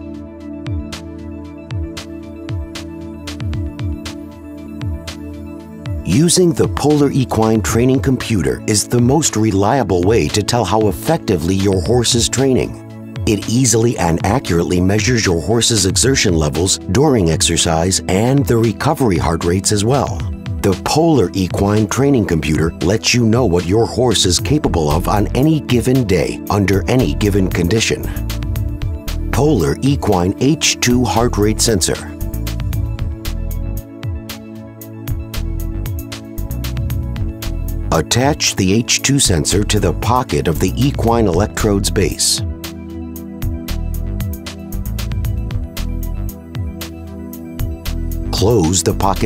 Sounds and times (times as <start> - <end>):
Music: 0.0 - 49.2
Speech: 6.0 - 28.2, 29.3 - 32.2, 37.9 - 42.5, 48.3 - 49.2.